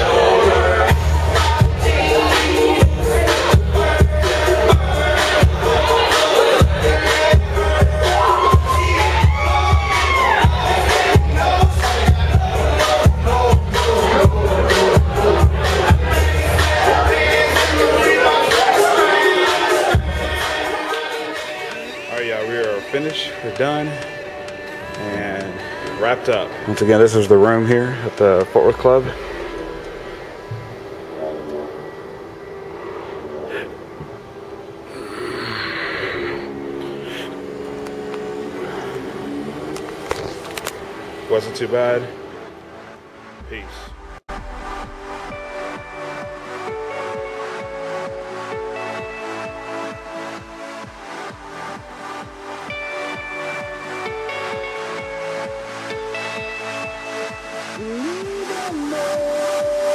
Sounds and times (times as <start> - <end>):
Music: 0.0 - 59.9.